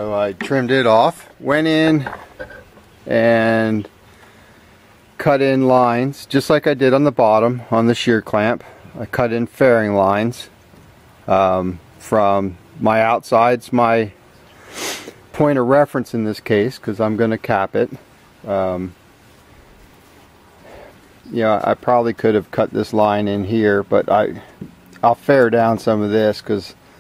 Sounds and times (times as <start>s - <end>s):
Speech: 0.0s - 2.1s, 3.1s - 3.9s, 5.2s - 10.5s, 11.3s - 14.2s, 15.3s - 19.0s, 21.3s - 26.8s.